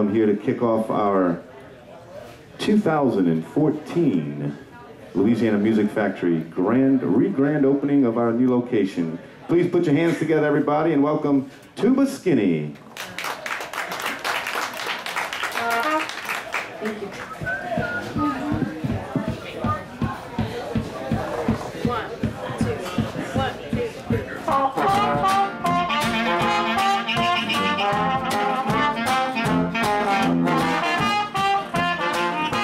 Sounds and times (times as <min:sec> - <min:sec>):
Speech: 0:00.0 - 0:12.8, 0:16.6 - 0:25.3
Funk: 0:16.8 - 0:32.6.